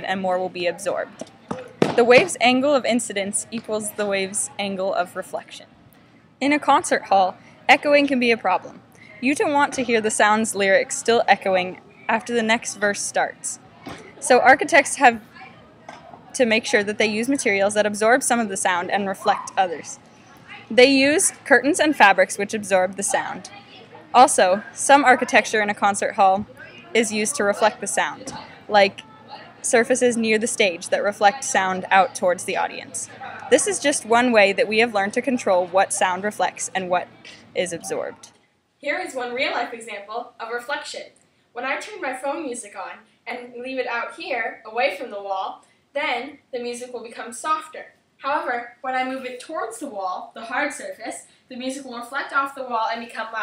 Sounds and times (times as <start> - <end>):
Speech: 0.0 - 1.2, 2.0 - 5.6, 6.4 - 15.6, 16.3 - 53.4.